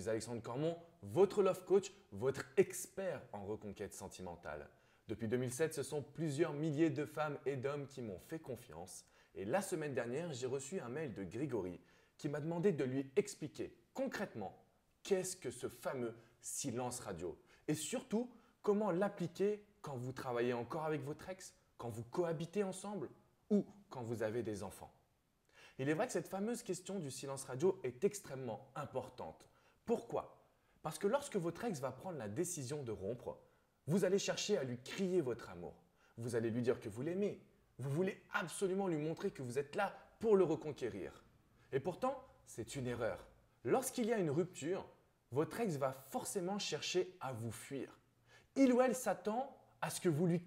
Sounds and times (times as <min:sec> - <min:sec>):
Speech: 0:00.0 - 0:25.0, 0:25.7 - 0:50.4.